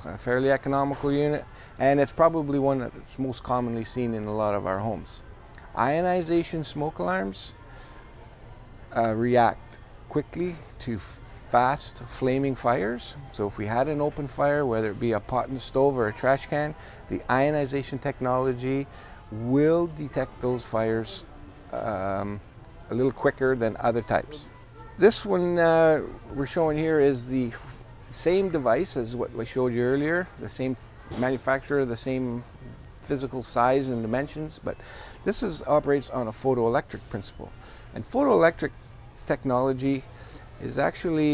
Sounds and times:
Speech: 0.0 - 7.7, 8.9 - 41.3.

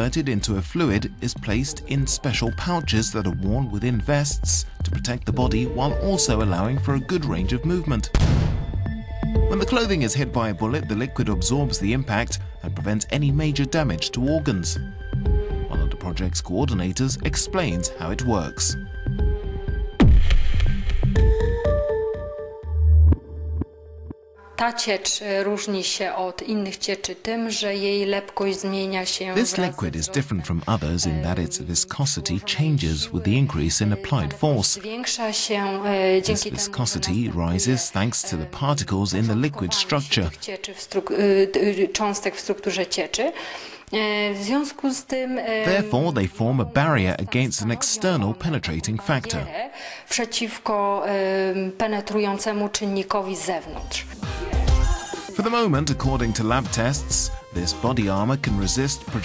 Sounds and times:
Speech: 0.0 - 8.2, 9.5 - 14.8, 15.7 - 18.8, 24.6 - 59.2
Music: 0.0 - 25.5, 28.2 - 40.5, 45.5 - 49.3, 53.0 - 59.2.

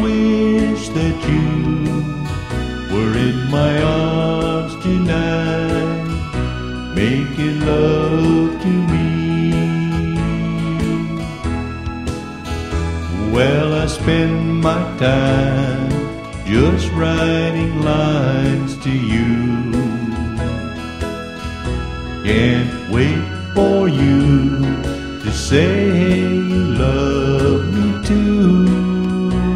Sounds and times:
Music: 0.0 - 29.5.

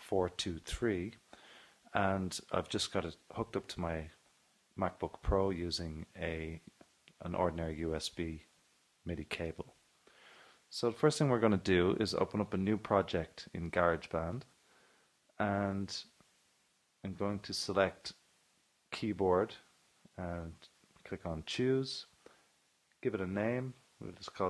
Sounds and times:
Speech: 0.0 - 1.2, 1.9 - 4.2, 4.8 - 9.8, 10.7 - 14.6, 15.4 - 16.2, 17.0 - 18.2, 18.9 - 22.2, 23.0 - 24.4.

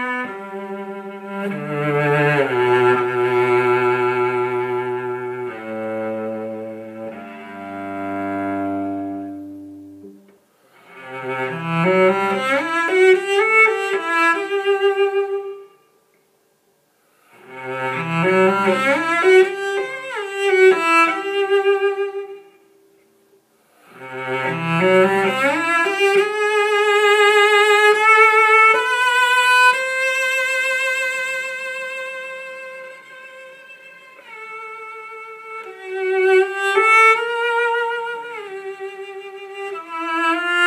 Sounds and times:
Double bass: 0.0 - 10.2, 10.9 - 14.8, 17.4 - 21.6, 23.9 - 29.4
Cello: 0.0 - 16.2, 17.1 - 40.6.

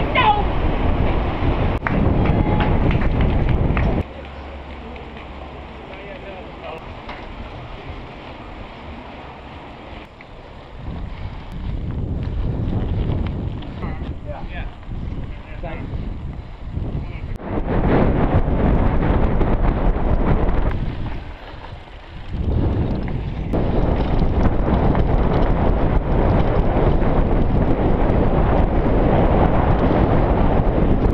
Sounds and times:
Bicycle: 0.0 - 31.1.

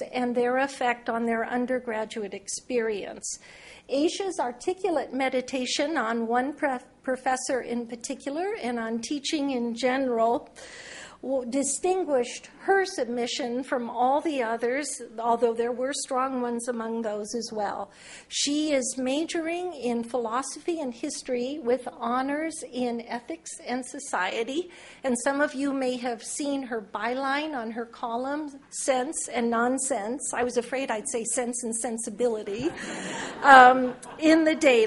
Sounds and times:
Female speech, woman speaking: 0.0 - 10.5, 11.3 - 32.7, 33.4 - 34.8.

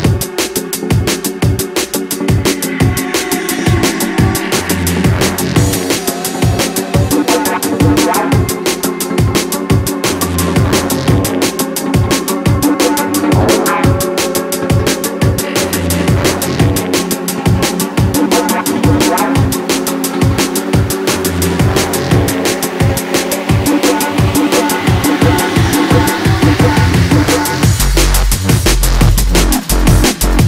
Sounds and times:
Music: 0.0 - 30.4.

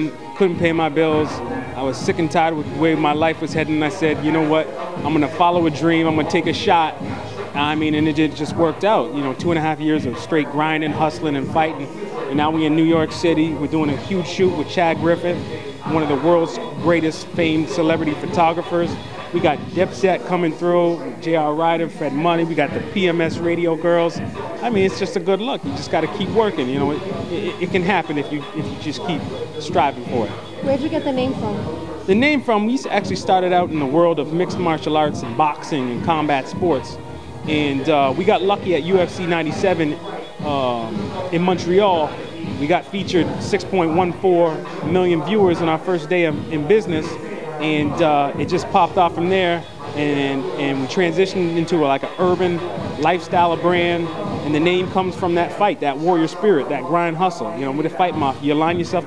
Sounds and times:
Music: 0.0 - 59.0
Speech: 0.0 - 59.0.

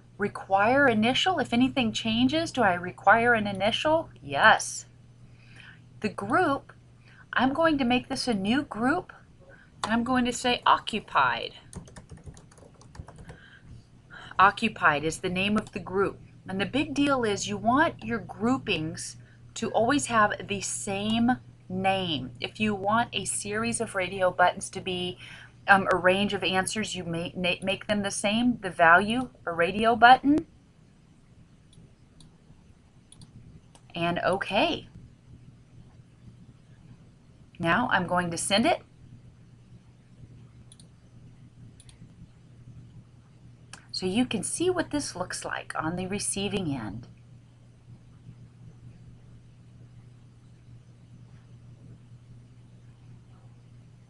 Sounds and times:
Narration, monologue: 0.0 - 52.5.

